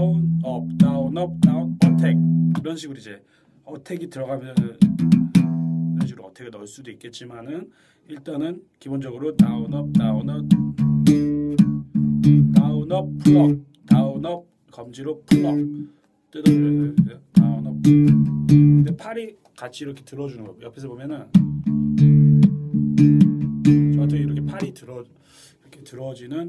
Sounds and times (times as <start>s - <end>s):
Bass guitar: 0.0s - 2.7s, 4.6s - 6.2s, 9.4s - 14.4s, 15.3s - 19.0s, 21.3s - 24.8s
Speech: 0.0s - 4.8s, 6.0s - 10.5s, 12.5s - 15.7s, 16.3s - 17.8s, 18.8s - 21.4s, 23.9s - 26.4s.